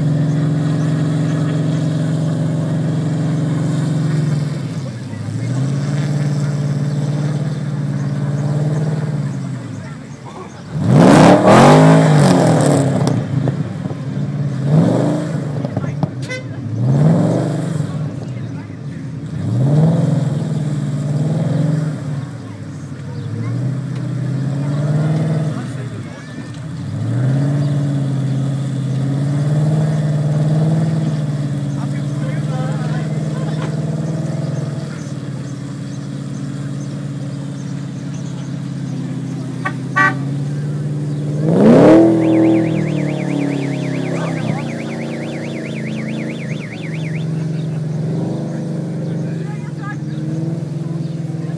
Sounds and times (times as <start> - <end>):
Car: 0.0 - 51.5
Speech: 9.4 - 10.8, 15.6 - 16.6, 17.9 - 19.2, 24.6 - 26.6, 31.7 - 33.8, 44.0 - 45.0, 49.1 - 50.2.